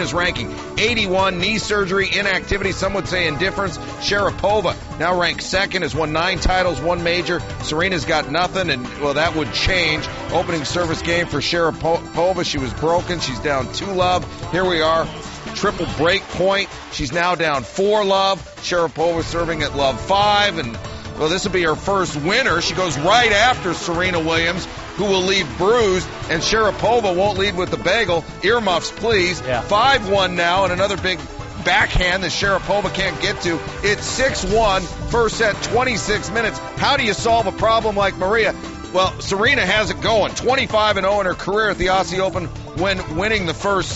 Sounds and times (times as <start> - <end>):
Music: 0.0 - 43.9
Speech: 0.0 - 43.9.